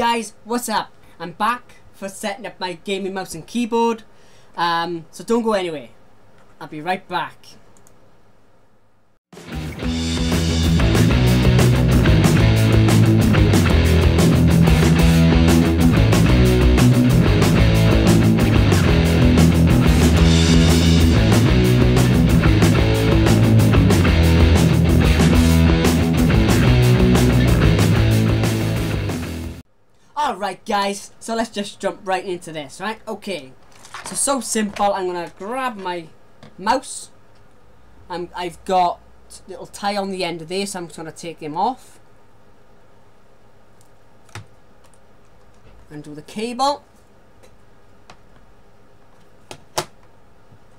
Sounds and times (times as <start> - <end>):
Speech: 0.0 - 6.0, 6.6 - 7.6, 30.2 - 37.2, 38.1 - 42.0, 45.9 - 46.9
Music: 9.4 - 29.6.